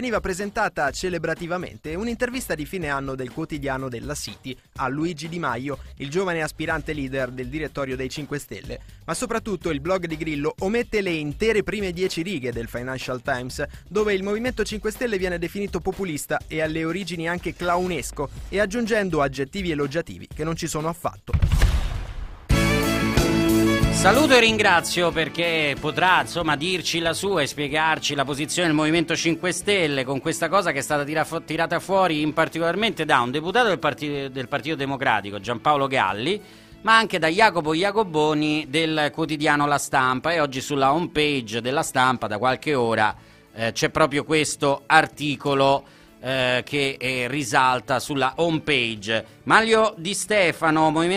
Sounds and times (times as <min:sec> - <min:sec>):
Speech: 0:00.0 - 0:21.4, 0:24.0 - 0:51.1
Music: 0:00.0 - 0:51.1.